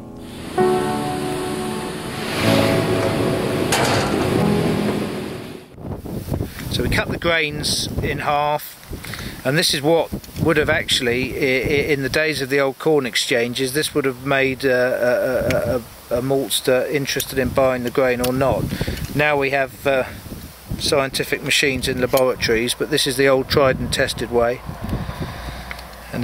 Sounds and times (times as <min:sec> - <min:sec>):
Music: 0:00.0 - 0:05.8
Outside, rural or natural: 0:00.0 - 0:26.2
Speech: 0:06.7 - 0:08.8, 0:09.4 - 0:20.2, 0:20.8 - 0:24.6.